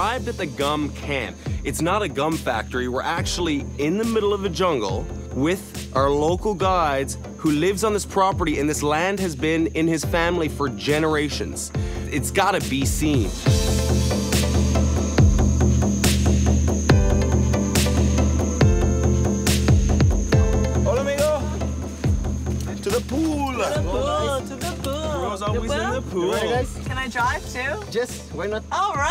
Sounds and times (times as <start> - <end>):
Music: 0.0 - 29.1.